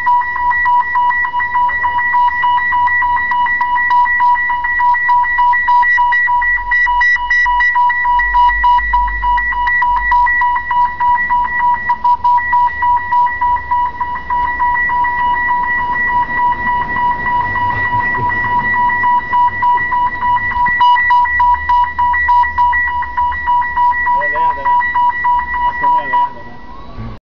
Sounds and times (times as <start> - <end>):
Vehicle: 0.2 - 27.2
Speech: 24.2 - 24.8, 25.8 - 27.2.